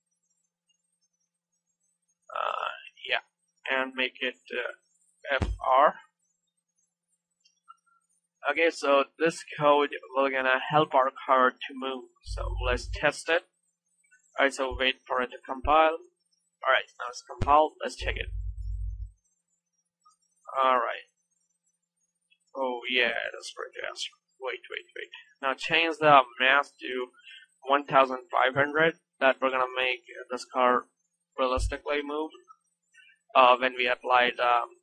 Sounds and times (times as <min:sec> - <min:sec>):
Speech: 0:02.3 - 0:06.1, 0:08.4 - 0:13.4, 0:14.4 - 0:16.0, 0:16.6 - 0:18.4, 0:20.5 - 0:21.0, 0:22.6 - 0:30.8, 0:31.4 - 0:32.4, 0:33.4 - 0:34.8.